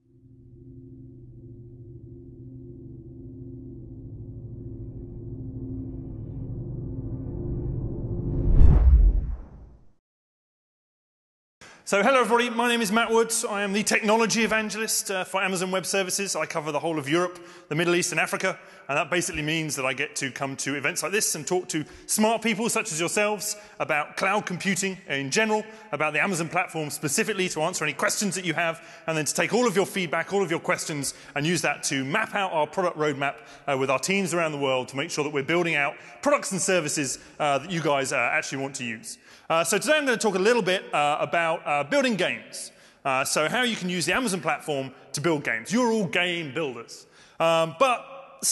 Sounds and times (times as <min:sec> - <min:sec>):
Speech: 0:11.9 - 0:48.5.